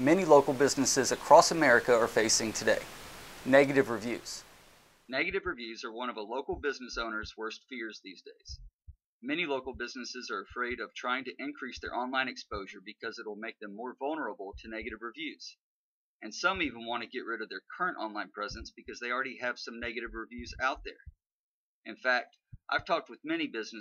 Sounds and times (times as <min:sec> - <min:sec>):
Speech: 0:00.0 - 0:02.9, 0:03.5 - 0:04.4, 0:05.1 - 0:08.6, 0:09.2 - 0:15.6, 0:16.2 - 0:21.1, 0:21.9 - 0:23.8.